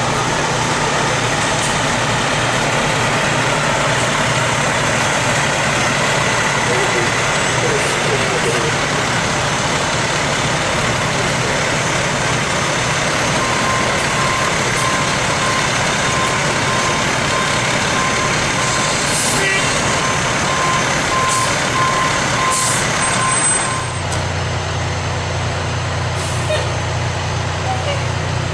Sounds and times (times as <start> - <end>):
Speech: 19.4 - 19.7, 27.6 - 28.1.